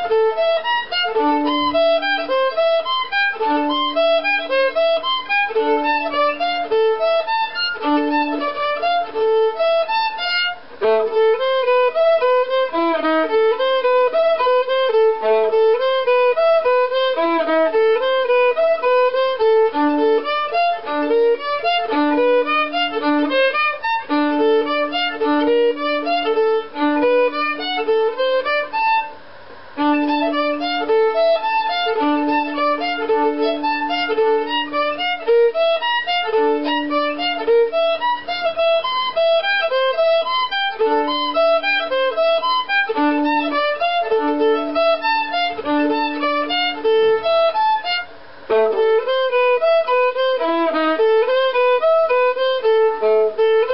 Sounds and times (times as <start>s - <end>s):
Violin, fiddle: 0.0s - 53.7s.